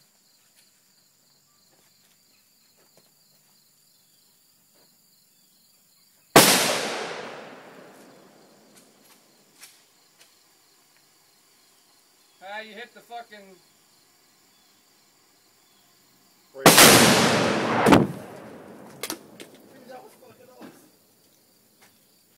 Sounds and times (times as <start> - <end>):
Explosion: 6.4 - 8.0, 16.6 - 19.4
Speech: 12.4 - 13.6, 19.7 - 20.9.